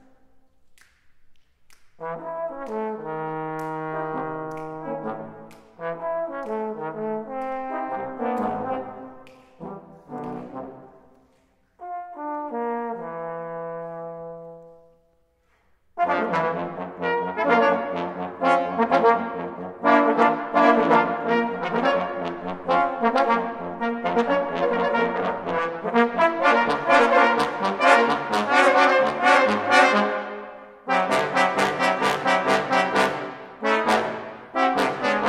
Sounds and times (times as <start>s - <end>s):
Trumpet: 2.0s - 11.2s, 11.8s - 14.9s, 16.0s - 35.2s.